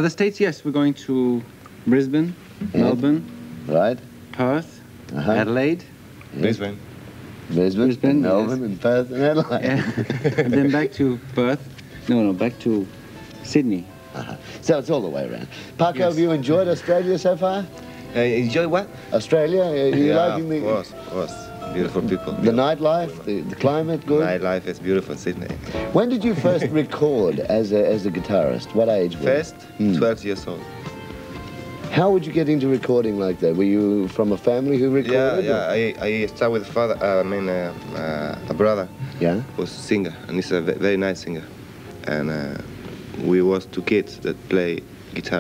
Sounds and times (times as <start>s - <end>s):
Music: 0.8s - 45.4s.